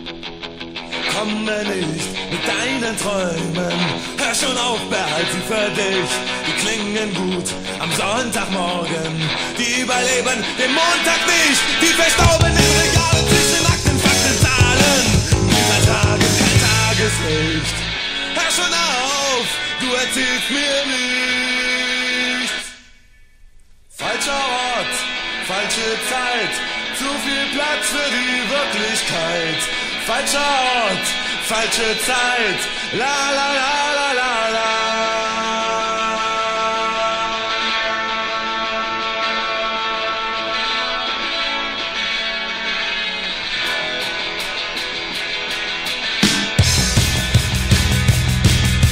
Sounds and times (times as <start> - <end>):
Punk rock: 0.0 - 22.6, 24.0 - 48.9.